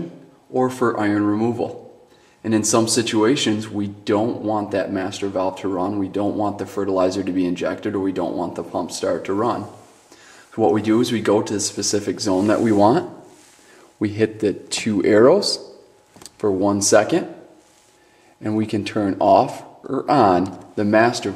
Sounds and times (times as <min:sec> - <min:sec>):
Speech: 0:00.0 - 0:09.9, 0:10.5 - 0:13.3, 0:14.0 - 0:15.7, 0:16.3 - 0:17.5, 0:18.4 - 0:21.3.